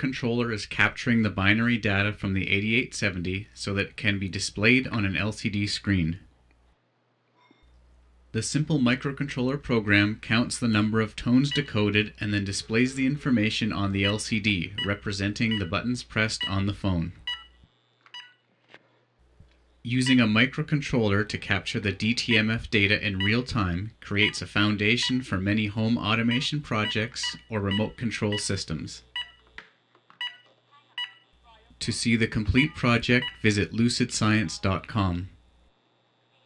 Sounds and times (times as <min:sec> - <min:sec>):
Speech: 0:00.0 - 0:06.3, 0:08.4 - 0:17.2, 0:19.9 - 0:29.1, 0:30.5 - 0:35.4
Telephone dialing, DTMF: 0:17.3 - 0:17.6, 0:18.2 - 0:18.4, 0:29.2 - 0:29.4, 0:30.2 - 0:31.2.